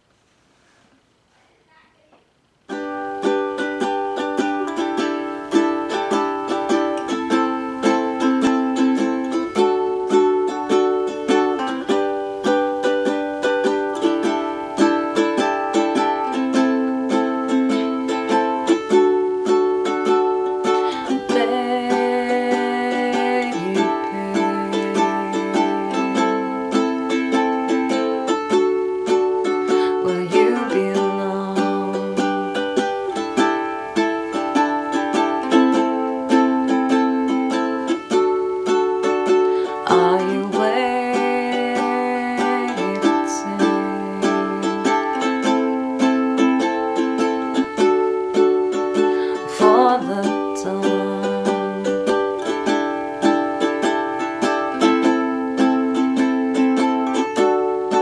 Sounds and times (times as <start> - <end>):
Inside, small room: 0.0 - 58.0
Ukulele: 2.5 - 58.0.